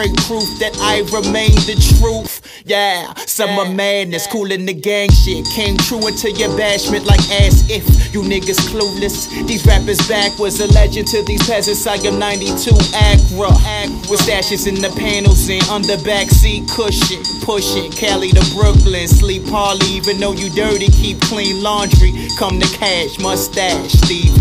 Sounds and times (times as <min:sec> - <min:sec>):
Music: 0:00.0 - 0:02.6, 0:03.2 - 0:24.4.